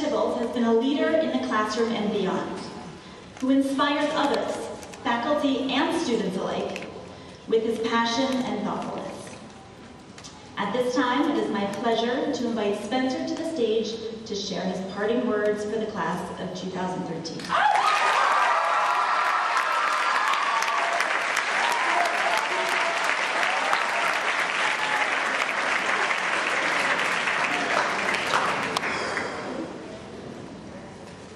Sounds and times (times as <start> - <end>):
Female speech, woman speaking: 0.0 - 2.8, 3.4 - 6.8, 7.5 - 9.3, 10.6 - 17.4.